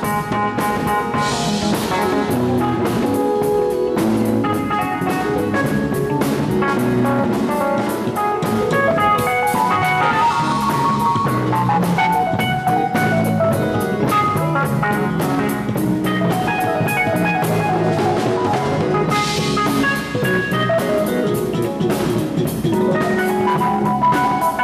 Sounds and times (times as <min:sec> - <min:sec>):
Drum: 0:00.0 - 0:24.6
Piano: 0:00.0 - 0:24.6.